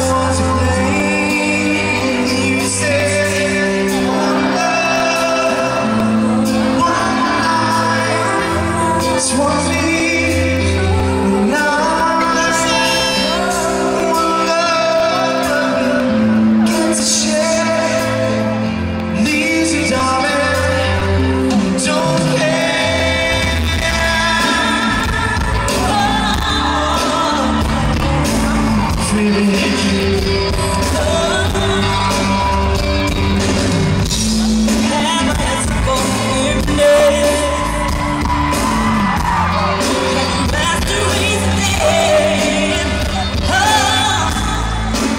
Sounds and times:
Singing: 0.0s - 33.4s, 34.1s - 45.1s
Music: 0.0s - 45.1s
Whoop: 36.9s - 40.6s.

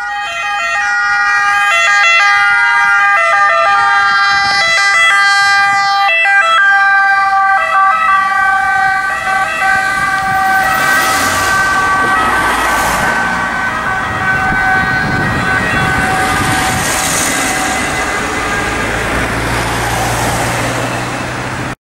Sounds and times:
Car passing by: 8.3s - 21.8s.

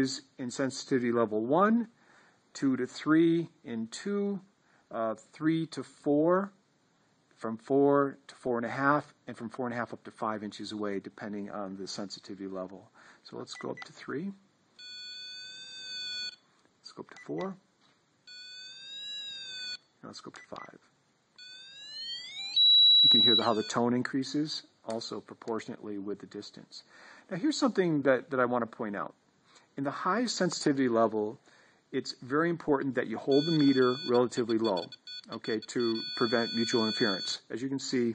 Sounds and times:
Speech: 0.0s - 2.0s, 2.6s - 6.6s, 7.4s - 14.4s, 16.8s - 17.6s, 20.0s - 20.8s, 23.1s - 29.2s, 29.8s - 31.4s, 32.0s - 38.1s
Inside, small room: 0.0s - 38.1s.

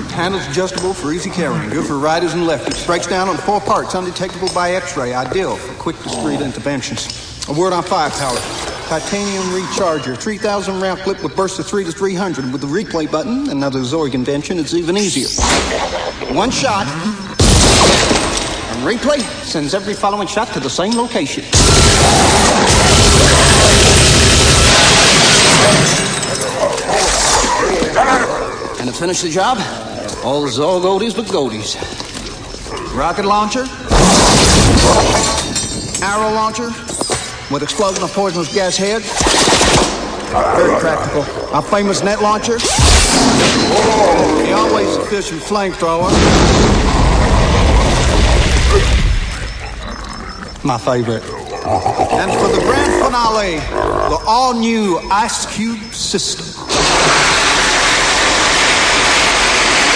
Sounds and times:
Speech: 0.0s - 15.4s, 16.3s - 17.3s, 27.6s - 31.9s, 32.9s - 33.8s, 40.4s - 42.6s, 43.8s - 46.1s, 50.6s - 51.4s, 52.1s - 56.6s.

